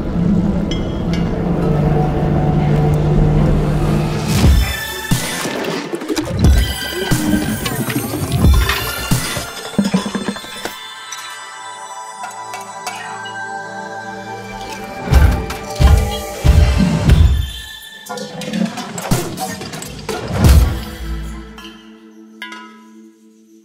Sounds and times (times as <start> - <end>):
Sound effect: 0.0 - 11.4, 14.5 - 22.0
Music: 0.0 - 23.6.